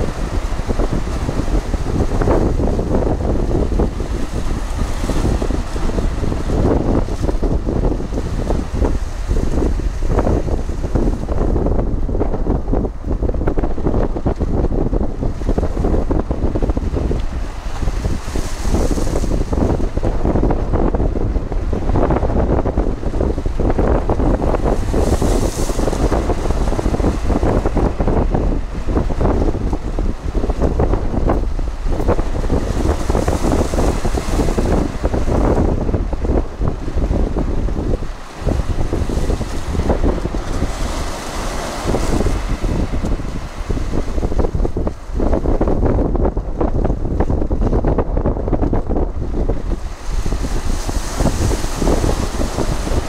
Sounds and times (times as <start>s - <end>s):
Waves, surf: 0.0s - 53.0s
Wind noise (microphone): 0.0s - 53.0s.